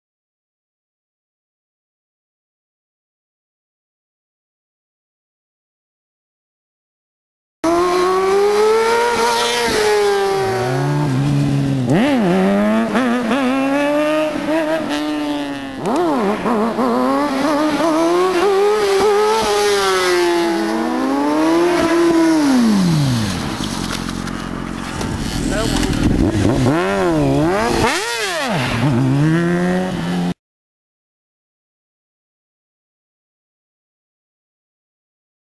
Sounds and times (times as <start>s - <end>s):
Motorcycle: 7.7s - 30.4s
Speech: 25.4s - 26.0s.